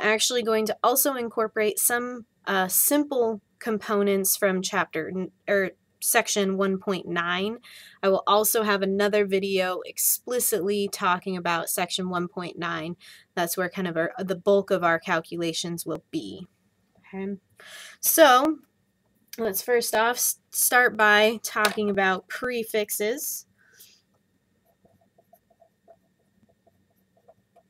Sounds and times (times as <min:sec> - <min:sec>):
Speech: 0:00.0 - 0:16.5, 0:17.1 - 0:18.6, 0:19.4 - 0:23.4.